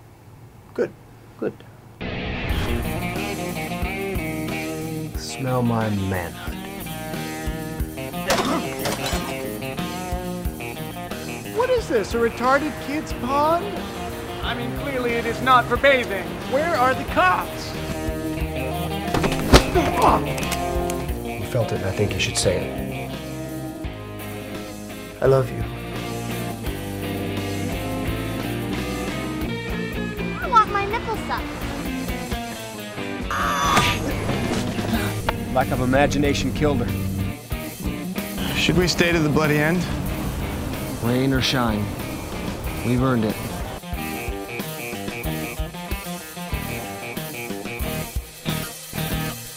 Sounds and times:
Music: 2.0s - 49.5s.

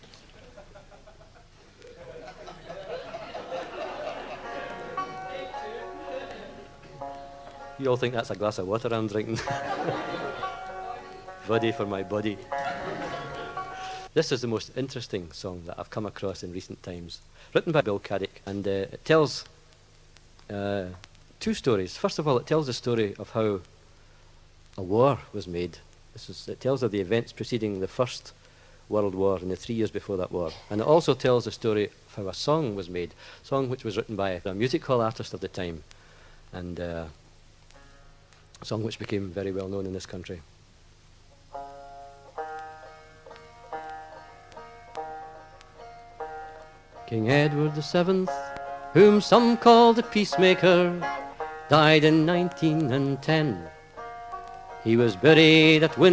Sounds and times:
Speech: 7.8s - 9.5s, 11.4s - 12.4s, 14.2s - 19.5s, 20.5s - 23.7s, 24.8s - 35.8s, 36.5s - 37.2s, 38.6s - 40.5s.

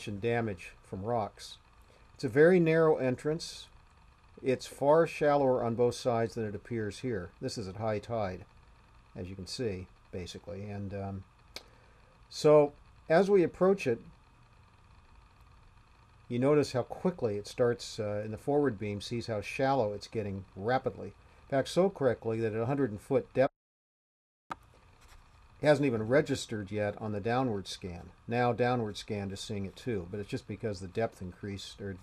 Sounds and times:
Speech: 0.0s - 1.6s, 2.2s - 3.7s, 4.4s - 8.5s, 9.2s - 11.2s, 12.3s - 14.1s, 16.3s - 23.5s, 25.6s - 32.0s.

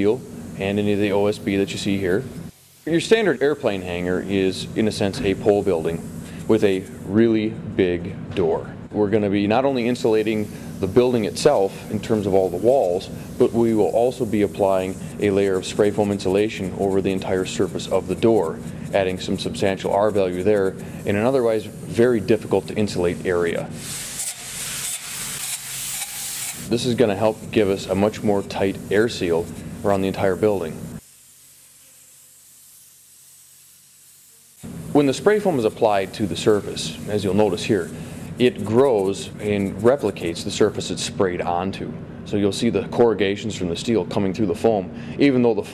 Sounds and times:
Speech: 0.0s - 2.3s, 2.9s - 23.7s, 26.7s - 30.8s, 35.0s - 45.7s
Spray: 0.0s - 7.2s, 9.8s - 41.0s.

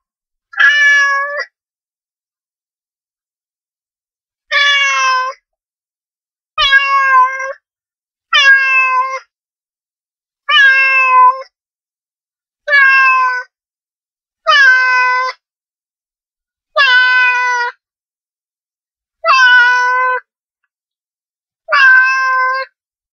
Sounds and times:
Meow: 0.5s - 1.6s, 4.5s - 5.5s, 6.6s - 7.7s, 8.3s - 9.4s, 10.4s - 11.6s, 12.6s - 13.6s, 14.4s - 15.5s, 16.7s - 17.8s, 19.2s - 20.3s, 21.6s - 22.8s.

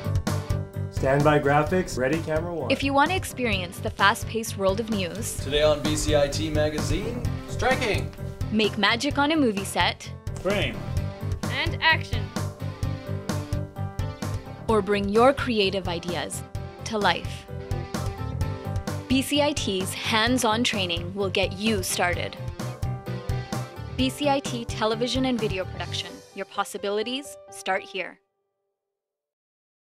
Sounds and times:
Music: 0.0s - 28.5s
Speech: 1.0s - 8.0s, 8.6s - 10.8s, 11.5s - 12.3s, 14.7s - 17.3s, 19.1s - 22.3s, 24.0s - 28.1s.

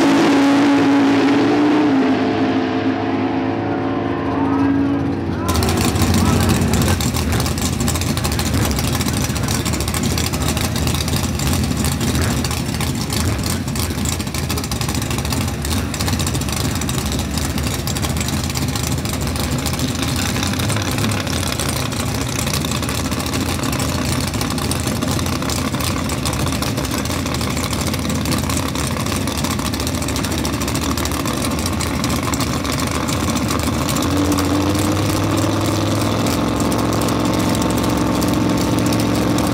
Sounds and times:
Car: 0.0s - 39.5s.

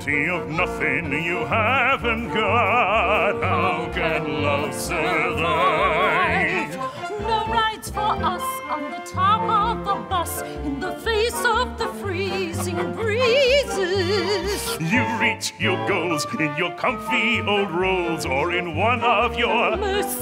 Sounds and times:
Funny music: 0.0s - 20.2s.

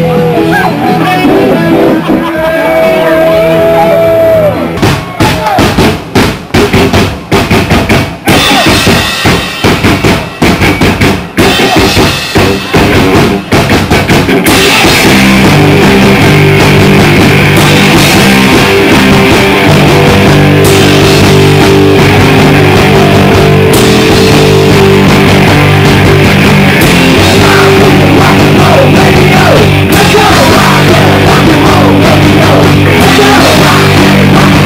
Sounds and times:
Speech: 0.0s - 4.2s, 8.3s - 8.8s
Rock and roll: 0.0s - 34.6s.

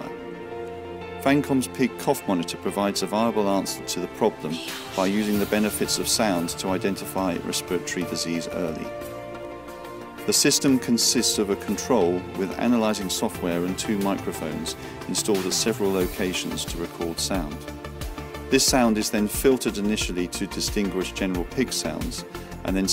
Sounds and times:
Music: 0.0s - 22.9s
Speech: 1.2s - 8.9s, 10.3s - 17.6s, 18.5s - 22.9s.

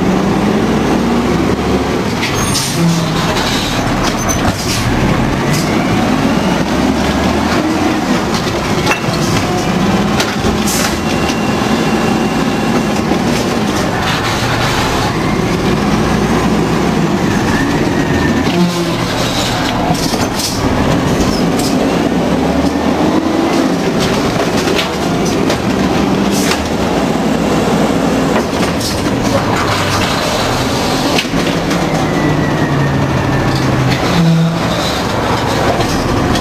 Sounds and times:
Truck: 0.0s - 36.4s.

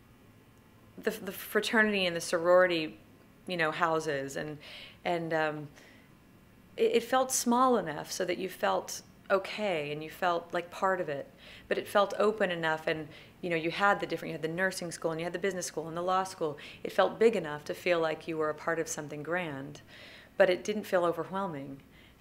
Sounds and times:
Speech: 1.0s - 5.8s, 6.8s - 19.8s, 20.4s - 21.8s.

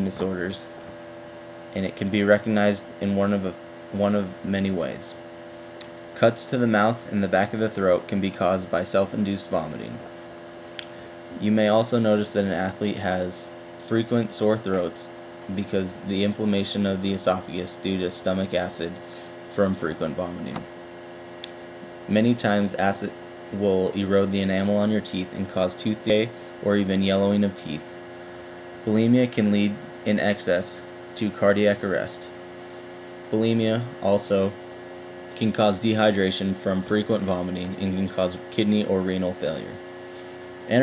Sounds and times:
Speech: 0.0s - 0.7s, 1.8s - 5.2s, 6.2s - 10.1s, 11.4s - 20.7s, 22.1s - 27.9s, 28.8s - 32.4s, 33.3s - 34.6s, 35.4s - 39.8s.

